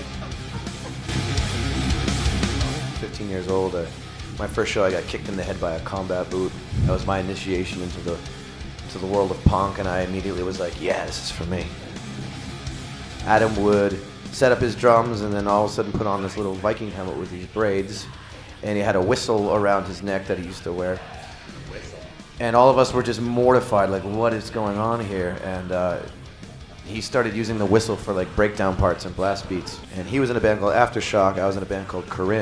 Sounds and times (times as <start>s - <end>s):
Music: 0.0s - 32.4s
Speech: 2.8s - 11.8s, 13.2s - 26.1s, 26.8s - 32.4s.